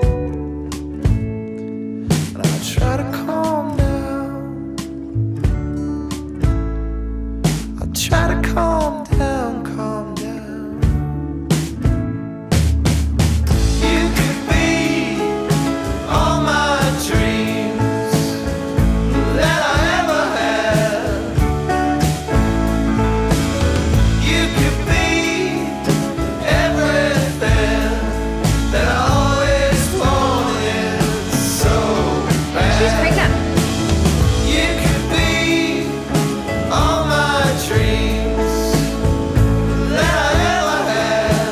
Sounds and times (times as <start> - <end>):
Independent music: 0.0 - 41.5.